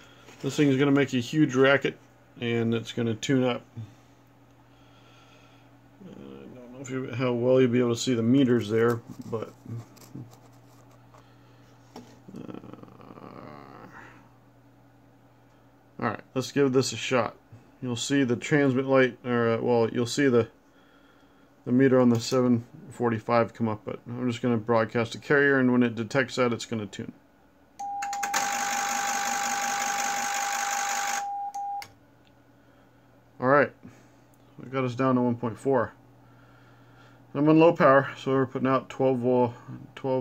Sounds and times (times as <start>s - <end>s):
Inside, small room: 0.0s - 40.2s
Speech: 0.4s - 3.7s, 6.0s - 9.8s, 16.0s - 20.6s, 21.7s - 27.2s, 33.4s - 33.8s, 34.6s - 36.0s, 37.3s - 40.2s.